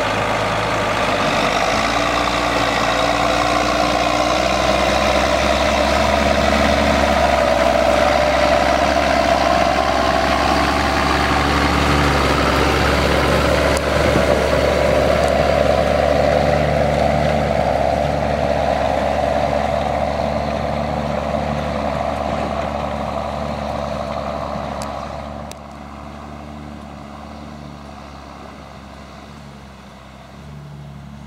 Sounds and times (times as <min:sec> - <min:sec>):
Outside, rural or natural: 0:00.0 - 0:31.2
Truck: 0:00.0 - 0:31.2.